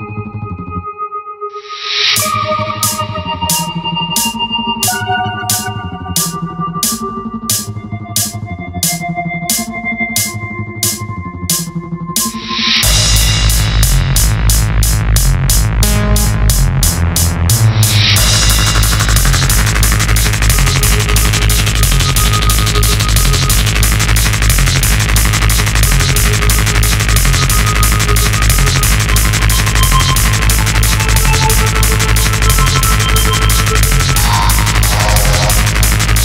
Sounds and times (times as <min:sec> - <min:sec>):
Soundtrack music: 0:00.0 - 0:36.2
Video game music: 0:01.8 - 0:36.2.